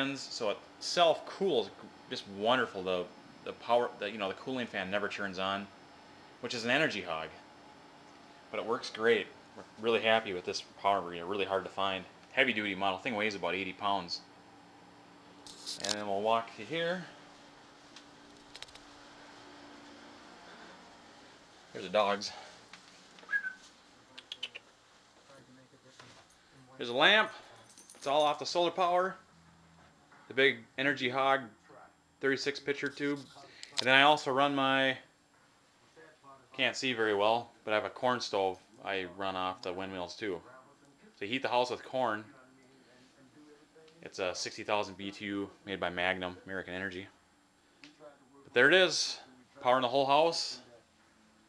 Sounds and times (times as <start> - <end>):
Speech: 0.0 - 5.7, 6.4 - 7.4, 8.5 - 14.3, 15.8 - 17.2, 21.7 - 22.5, 25.2 - 29.2, 30.3 - 35.1, 35.9 - 47.2, 47.9 - 50.9.